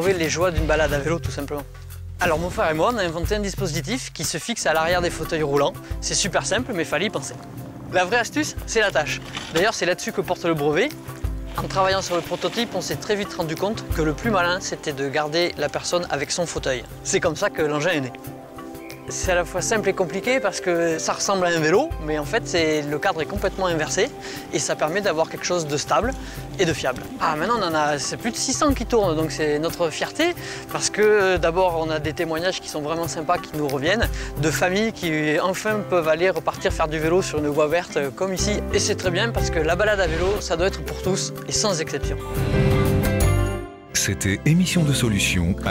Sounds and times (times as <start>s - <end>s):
Speech: 0.0s - 11.0s, 11.6s - 18.2s, 19.1s - 42.2s, 44.0s - 45.7s
Music: 0.0s - 45.7s.